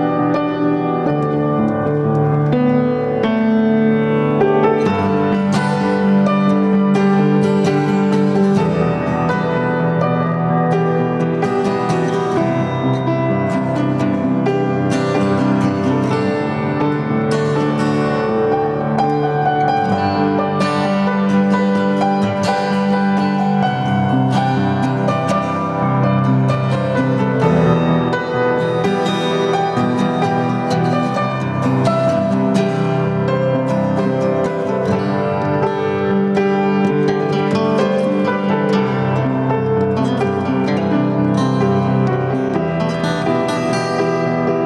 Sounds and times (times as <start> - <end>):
Acoustic guitar: 0.0 - 44.6
Strum: 0.0 - 44.6.